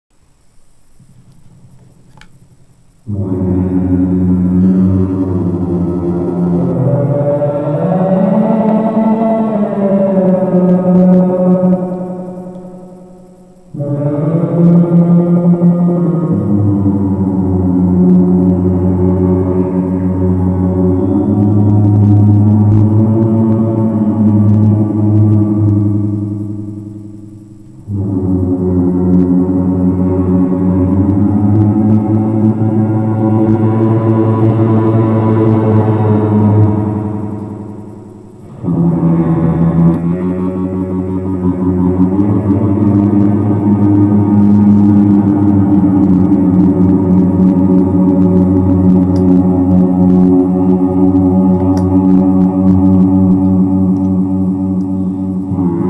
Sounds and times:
Effects unit: 0.2 - 55.8
Music: 0.3 - 55.8.

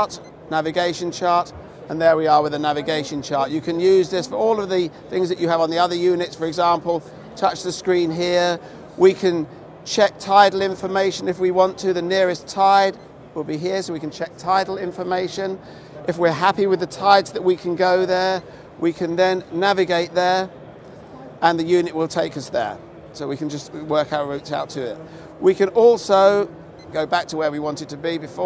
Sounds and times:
Speech: 0.0 - 20.5, 21.2 - 28.4.

